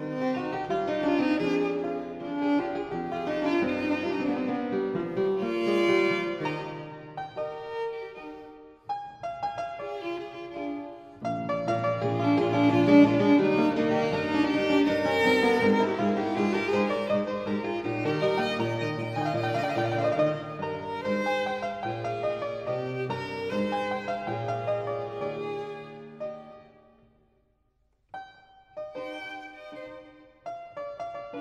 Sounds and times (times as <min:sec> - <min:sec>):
Violin, fiddle: 0:00.0 - 0:26.9, 0:28.8 - 0:31.4.